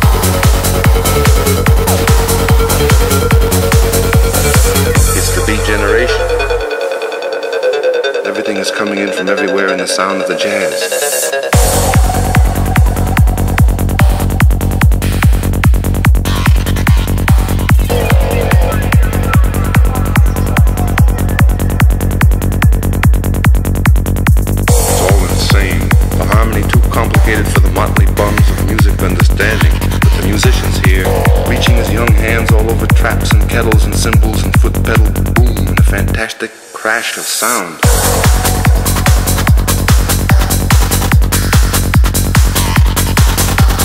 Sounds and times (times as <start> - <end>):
Trance music: 0.0 - 36.8, 37.8 - 43.8
Speech: 5.0 - 6.5, 8.2 - 10.9, 17.9 - 21.8, 24.7 - 37.9.